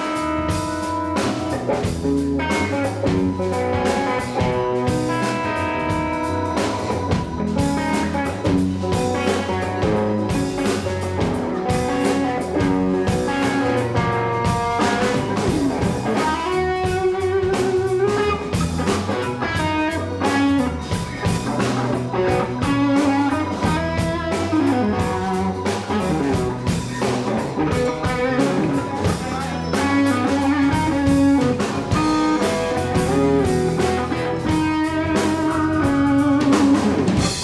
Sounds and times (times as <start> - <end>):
Music: 0.0 - 37.4.